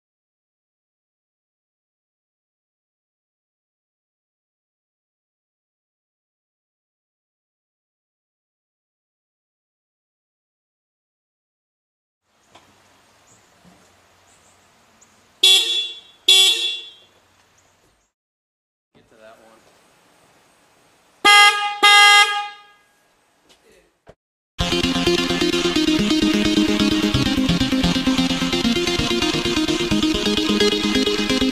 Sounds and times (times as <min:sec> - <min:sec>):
Outside, urban or manmade: 0:12.2 - 0:18.2, 0:18.9 - 0:31.5
Vehicle horn, car horn, honking: 0:15.4 - 0:17.1, 0:21.2 - 0:23.0
Speech: 0:19.0 - 0:19.7, 0:23.5 - 0:24.0.